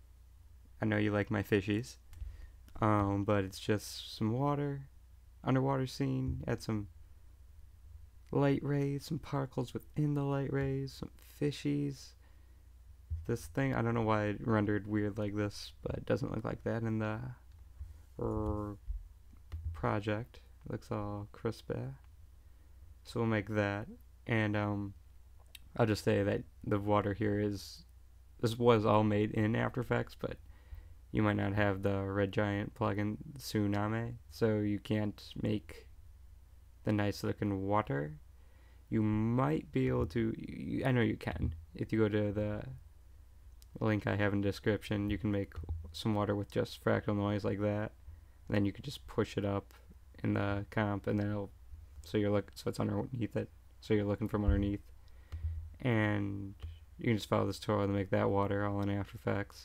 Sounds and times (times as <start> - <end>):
Speech: 0.8 - 2.0, 2.7 - 6.9, 8.3 - 12.2, 13.2 - 17.5, 18.2 - 18.8, 19.7 - 22.1, 23.0 - 25.0, 25.6 - 30.4, 31.1 - 35.9, 36.8 - 38.2, 38.9 - 42.8, 43.6 - 54.9, 55.8 - 59.6.